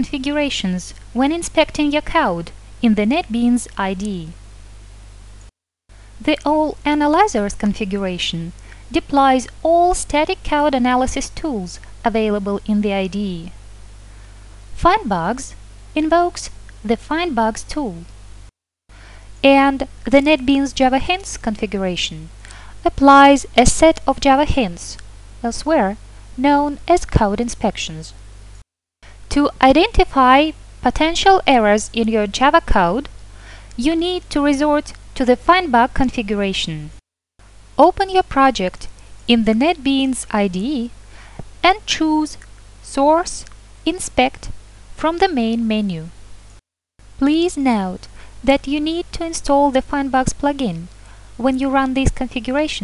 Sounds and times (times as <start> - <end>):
Speech: 0.0 - 4.4, 6.2 - 13.6, 14.8 - 18.1, 19.4 - 28.2, 29.3 - 33.1, 33.8 - 37.0, 37.8 - 41.0, 41.6 - 46.1, 47.2 - 52.8.